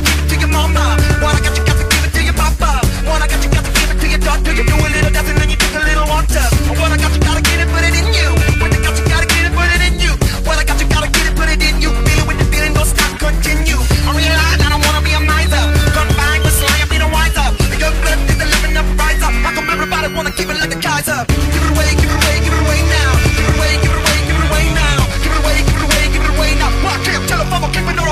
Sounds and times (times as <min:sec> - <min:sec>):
Dubstep: 0:00.0 - 0:28.1.